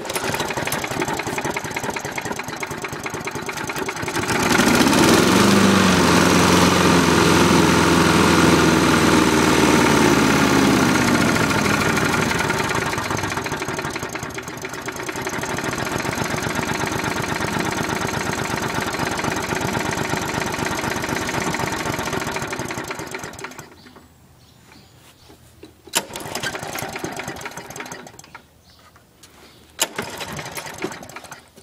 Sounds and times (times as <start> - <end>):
Lawn mower: 0.0 - 24.0, 25.9 - 28.4, 29.8 - 31.6.